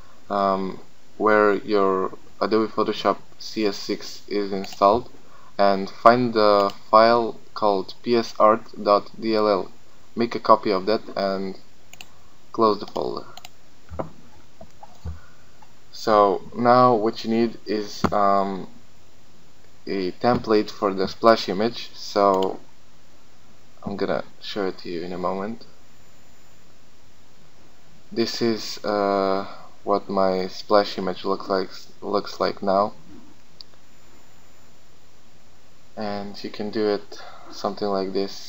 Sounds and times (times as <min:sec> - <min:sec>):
Speech: 0:00.3 - 0:11.6, 0:12.6 - 0:13.4, 0:15.9 - 0:18.7, 0:19.9 - 0:22.6, 0:23.8 - 0:25.8, 0:28.1 - 0:33.0, 0:36.0 - 0:38.4.